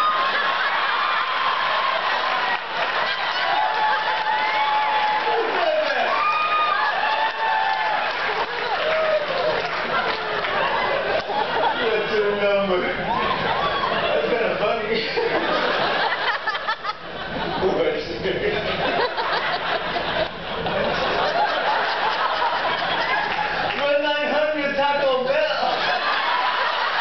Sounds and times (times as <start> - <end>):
Speech: 11.8 - 13.0, 17.6 - 18.6, 23.8 - 25.8.